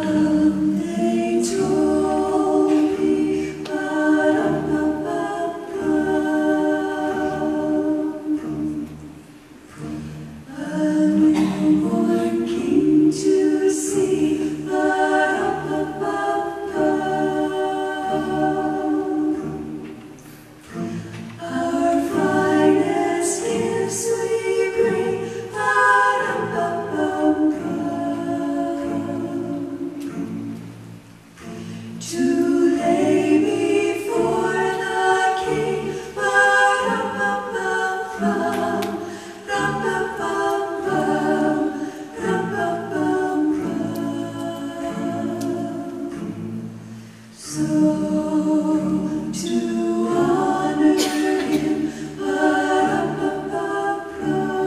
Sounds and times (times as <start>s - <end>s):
A capella: 0.0s - 54.6s
Choir: 0.0s - 54.6s.